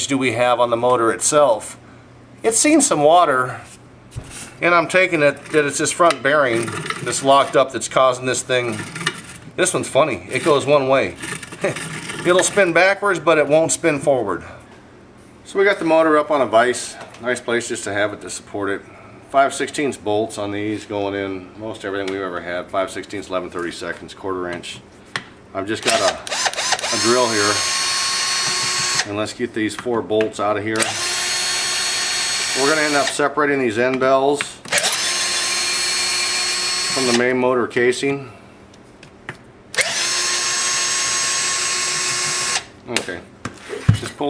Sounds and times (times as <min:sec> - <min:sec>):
Speech: 0:00.0 - 0:01.8, 0:02.4 - 0:03.7, 0:04.6 - 0:08.9, 0:09.6 - 0:14.6, 0:15.5 - 0:24.9, 0:25.5 - 0:26.3, 0:26.9 - 0:27.6, 0:29.0 - 0:30.9, 0:32.6 - 0:34.7, 0:36.9 - 0:38.4, 0:42.9 - 0:43.3, 0:44.0 - 0:44.2.